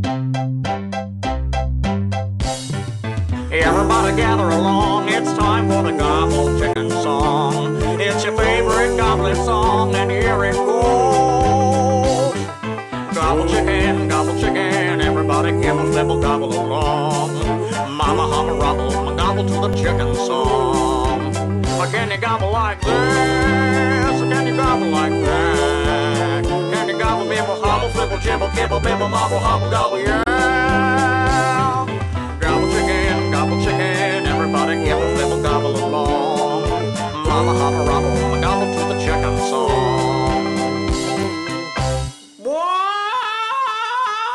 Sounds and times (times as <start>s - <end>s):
Music: 0.0s - 42.5s.